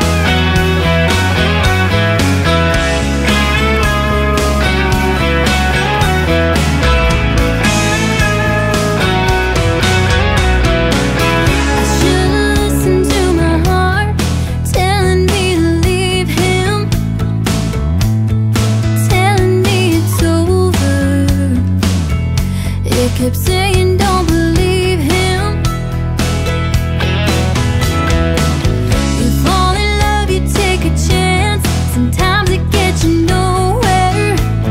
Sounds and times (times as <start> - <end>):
Music: 0.0 - 34.7.